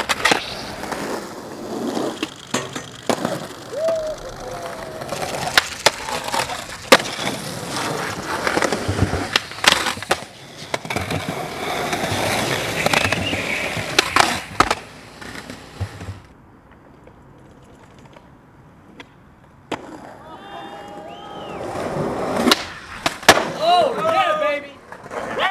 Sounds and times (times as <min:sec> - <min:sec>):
Skateboard: 0:00.0 - 0:25.5.